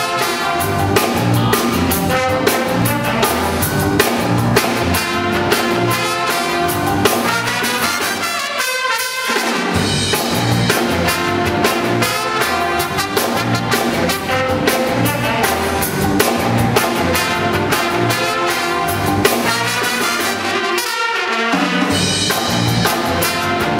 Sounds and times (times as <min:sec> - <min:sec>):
Musical instrument: 0:00.0 - 0:23.7.